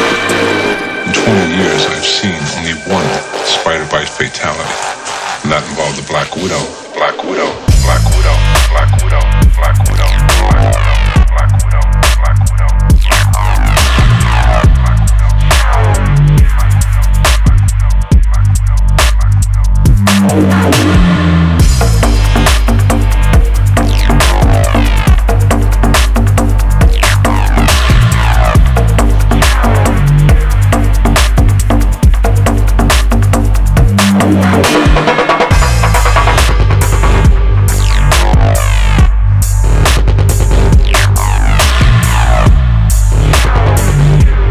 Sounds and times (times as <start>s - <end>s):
Music: 0.0s - 44.5s
Speech: 1.1s - 4.8s, 5.4s - 8.9s
Static: 3.1s - 11.4s.